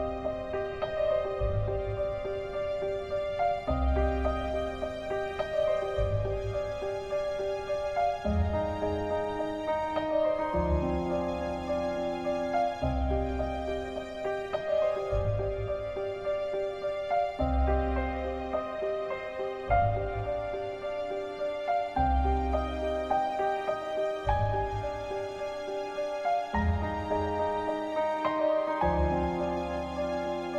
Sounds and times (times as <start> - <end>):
Music: 0.0 - 30.5.